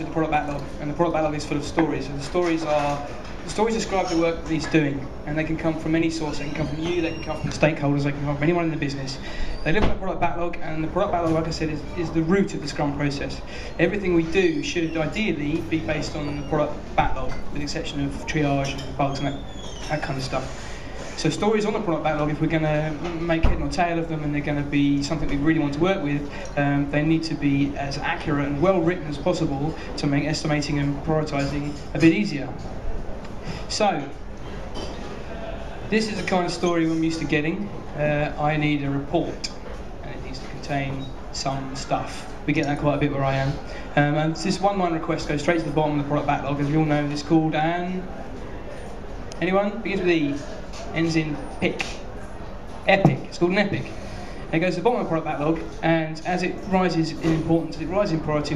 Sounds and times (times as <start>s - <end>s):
Speech: 0.0s - 20.5s, 21.2s - 32.6s, 33.7s - 34.2s, 35.9s - 48.2s, 49.3s - 52.1s, 52.8s - 53.9s, 54.5s - 58.5s.